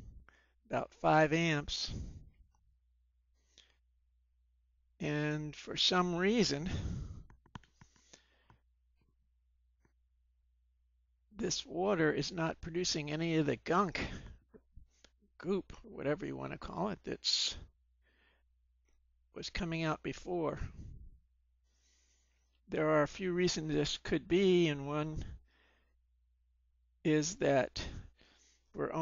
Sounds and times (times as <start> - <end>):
Speech: 0.7 - 2.1, 5.0 - 7.0, 11.4 - 14.3, 15.4 - 17.7, 19.4 - 20.8, 22.7 - 25.4, 27.1 - 28.1, 28.8 - 29.0.